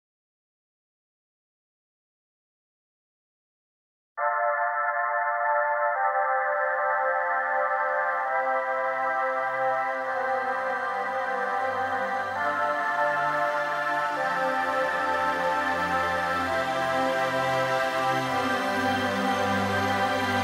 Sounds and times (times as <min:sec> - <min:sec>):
Ambient music: 0:04.2 - 0:20.4.